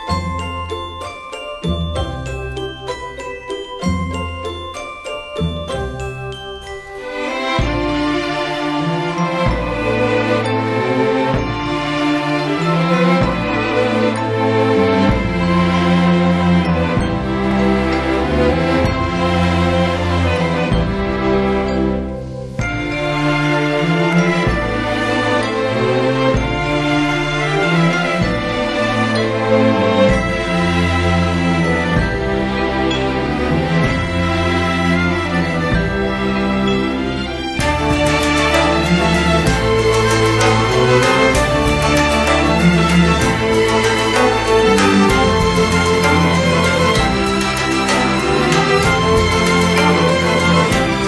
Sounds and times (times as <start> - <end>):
Jingle, tinkle: 0.0 - 51.0.